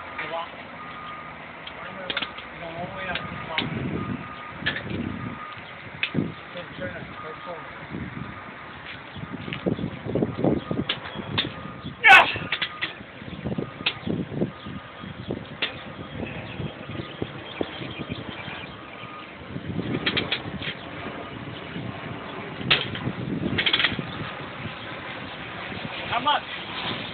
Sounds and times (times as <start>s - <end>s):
Speech: 1.8s - 3.7s, 6.6s - 7.7s, 26.1s - 26.5s.